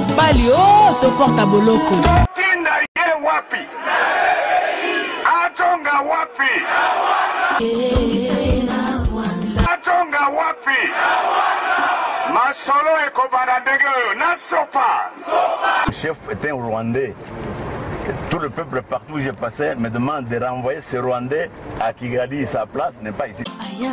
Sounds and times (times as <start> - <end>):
Music: 0.0 - 2.3, 7.6 - 9.7, 23.5 - 23.9
Speech: 0.2 - 3.7, 5.2 - 6.6, 9.7 - 10.9, 12.3 - 15.1, 15.9 - 17.2, 18.1 - 23.5.